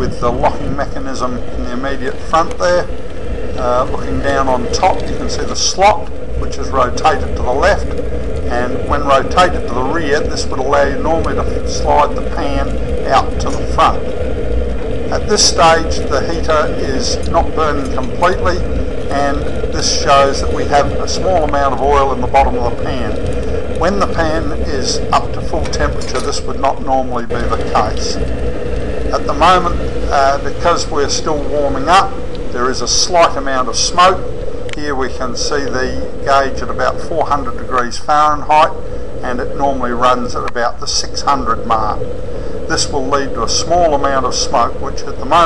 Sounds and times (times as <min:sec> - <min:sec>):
Speech: 0:00.0 - 0:02.9, 0:03.6 - 0:14.0, 0:15.1 - 0:28.2, 0:29.1 - 0:42.0, 0:42.7 - 0:45.4.